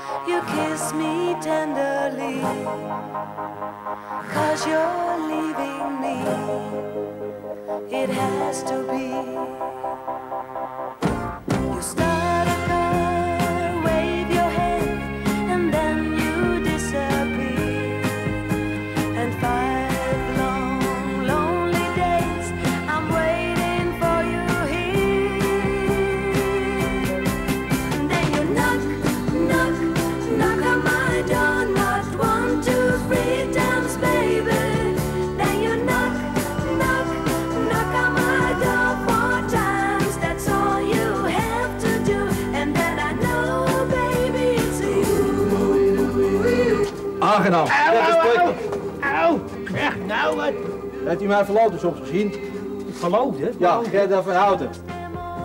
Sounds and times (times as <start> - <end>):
Music: 0.0 - 55.4.